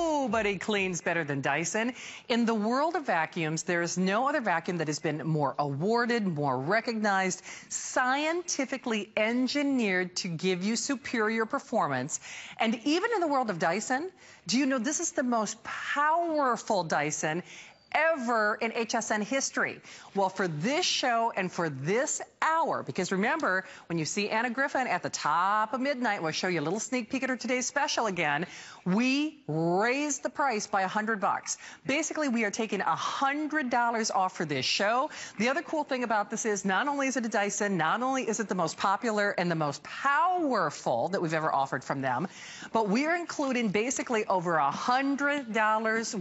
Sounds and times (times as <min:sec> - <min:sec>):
Speech: 0:00.0 - 0:17.4, 0:18.0 - 0:46.2.